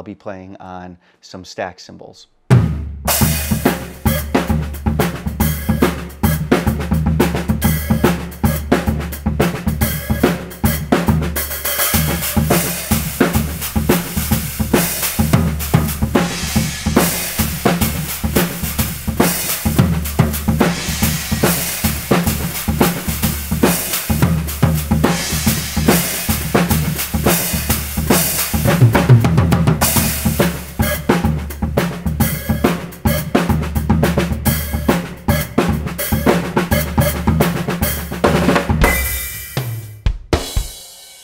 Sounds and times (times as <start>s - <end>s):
Bass drum: 2.5s - 40.8s
Drum kit: 2.5s - 41.2s
Drum roll: 2.5s - 41.2s.